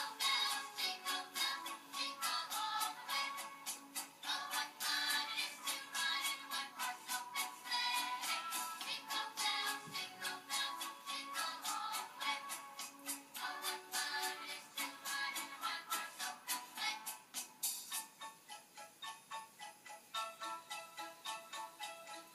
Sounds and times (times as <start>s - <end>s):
Jingle (music): 0.0s - 22.3s.